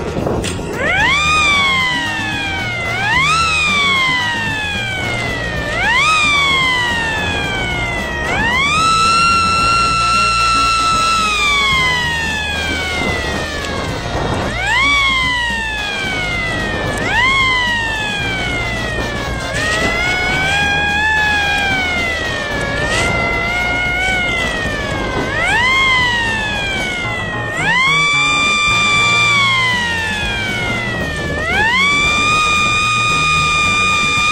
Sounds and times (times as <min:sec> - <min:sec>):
Bicycle: 0:00.0 - 0:34.3
Music: 0:00.0 - 0:34.3
Whir: 0:00.0 - 0:34.3.